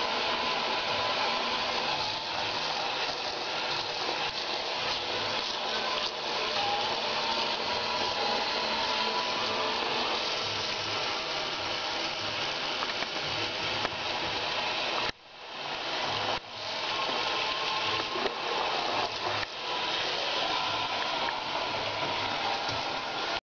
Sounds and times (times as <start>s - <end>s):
Sink (filling or washing): 0.0s - 23.4s
Water tap, faucet: 0.0s - 23.4s.